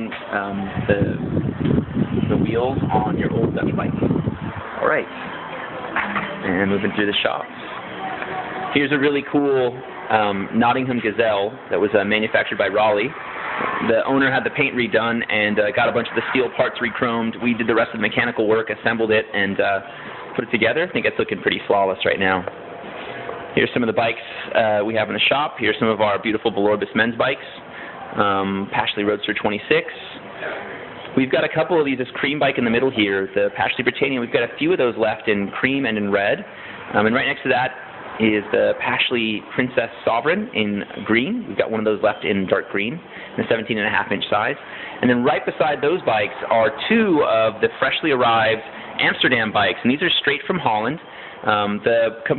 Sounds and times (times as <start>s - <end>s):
Speech: 0.0s - 1.3s, 2.2s - 4.1s, 4.8s - 5.1s, 6.4s - 13.2s, 13.8s - 22.5s, 23.6s - 52.3s.